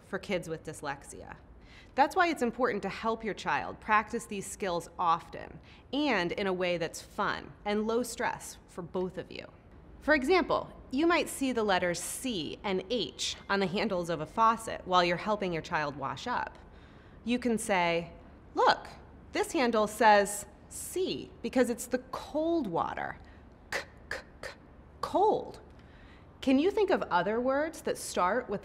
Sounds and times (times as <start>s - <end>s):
Speech: 0.0s - 1.4s, 2.0s - 16.6s, 17.3s - 23.2s, 23.8s - 25.6s, 26.4s - 28.6s.